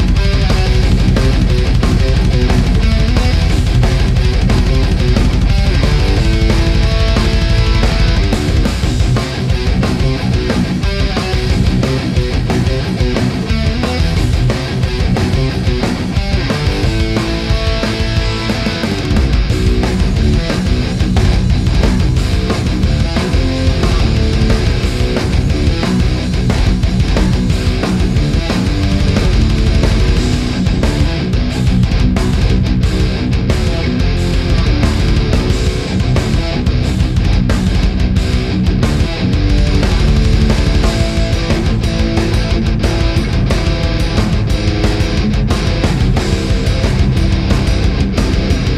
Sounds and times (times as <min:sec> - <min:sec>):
Distortion: 0:00.0 - 0:48.7
Music: 0:00.0 - 0:48.7.